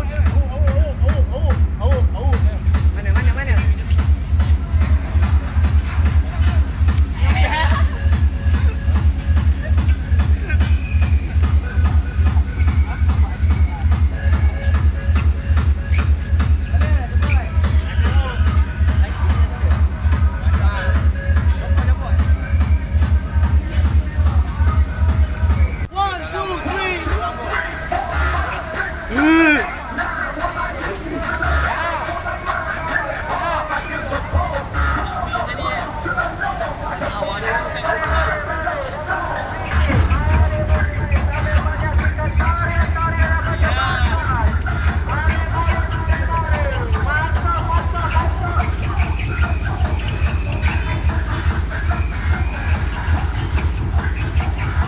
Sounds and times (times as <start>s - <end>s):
Speech: 0.0s - 4.2s, 6.1s - 8.0s, 16.7s - 25.3s, 25.9s - 49.2s
Music: 0.0s - 54.8s.